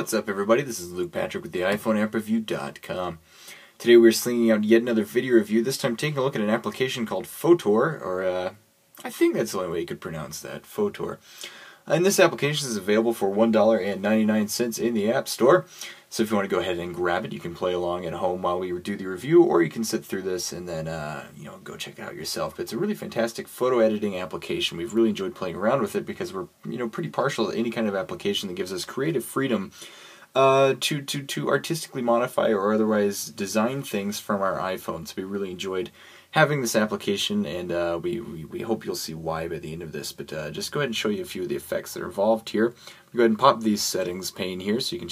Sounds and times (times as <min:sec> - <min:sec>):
Speech: 0:00.0 - 0:03.2, 0:03.8 - 0:11.2, 0:11.9 - 0:45.1.